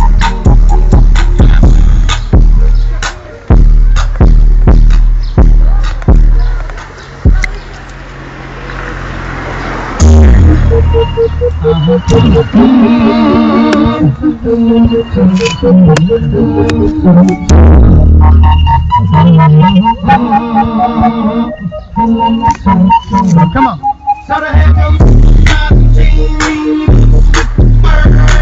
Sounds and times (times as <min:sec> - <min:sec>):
Soundtrack music: 0:00.0 - 0:06.3, 0:10.0 - 0:28.4.